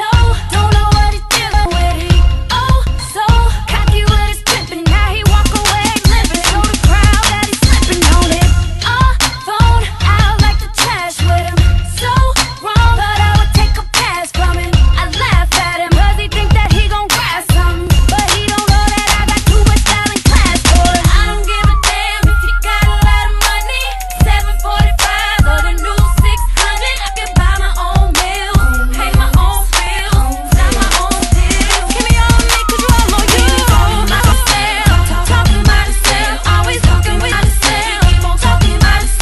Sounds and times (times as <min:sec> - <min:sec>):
Music: 0:00.0 - 0:39.2.